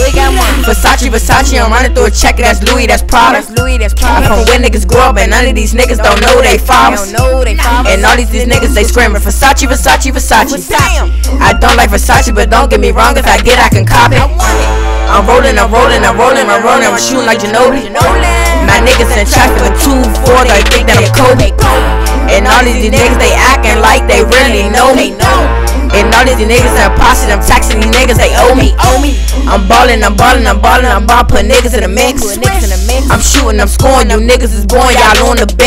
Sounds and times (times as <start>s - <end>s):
Music: 0.0s - 35.6s.